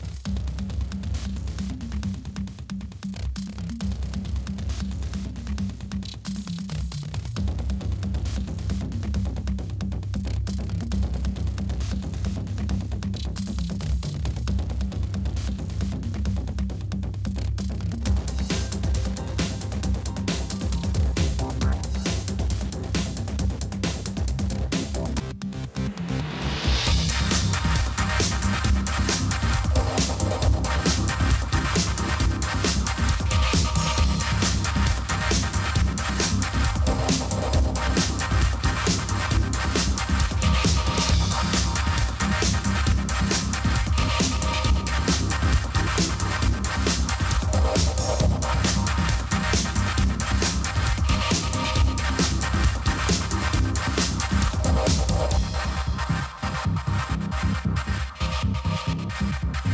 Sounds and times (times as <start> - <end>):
Music: 0.0 - 59.7.